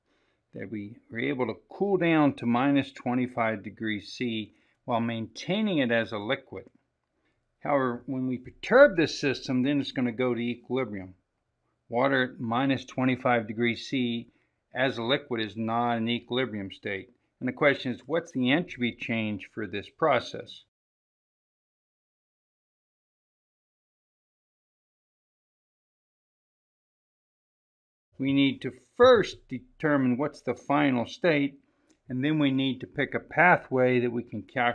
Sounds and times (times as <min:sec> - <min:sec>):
Speech: 0:00.6 - 0:06.8, 0:07.6 - 0:11.2, 0:11.9 - 0:20.7, 0:28.2 - 0:34.7.